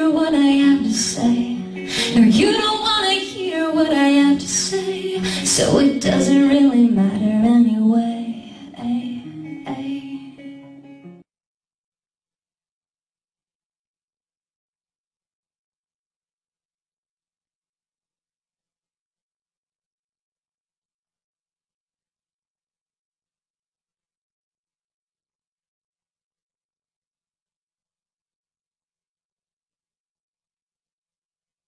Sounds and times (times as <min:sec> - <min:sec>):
Female singing: 0:00.0 - 0:10.4
Music: 0:00.0 - 0:11.3.